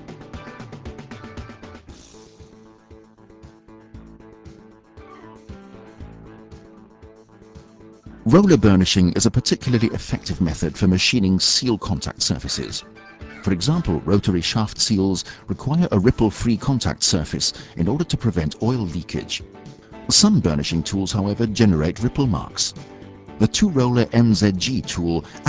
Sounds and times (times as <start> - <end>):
Music: 0.0 - 25.4
Speech: 8.3 - 19.4, 20.1 - 22.7, 23.4 - 25.4.